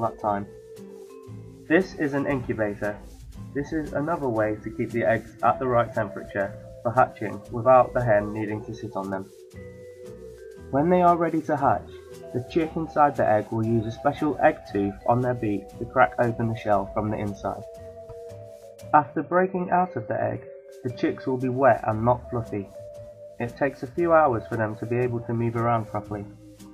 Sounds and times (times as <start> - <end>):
Speech: 0.0 - 0.5, 1.7 - 3.0, 3.6 - 9.3, 10.7 - 11.8, 12.4 - 17.6, 19.0 - 22.7, 23.4 - 26.3
Music: 0.0 - 26.7.